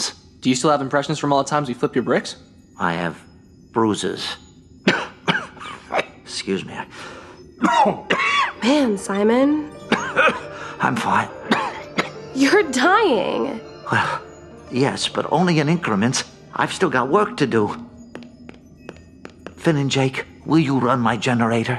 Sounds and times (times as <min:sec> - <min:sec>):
Speech: 0:00.0 - 0:03.2, 0:03.8 - 0:04.4, 0:06.3 - 0:06.9, 0:08.6 - 0:09.7, 0:12.4 - 0:14.2, 0:14.8 - 0:17.8, 0:19.6 - 0:21.7
Music: 0:00.0 - 0:21.7.